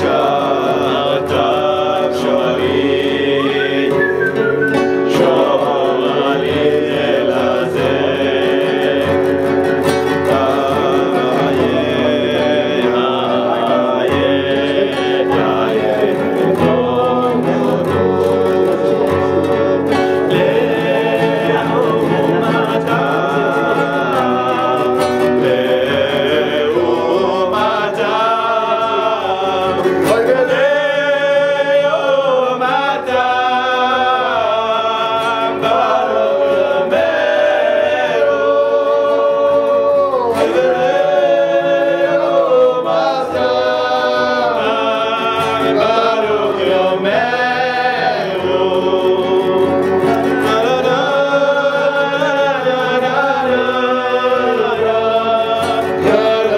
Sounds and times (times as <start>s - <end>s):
Male singing: 0.0s - 56.5s
Music: 0.0s - 56.5s.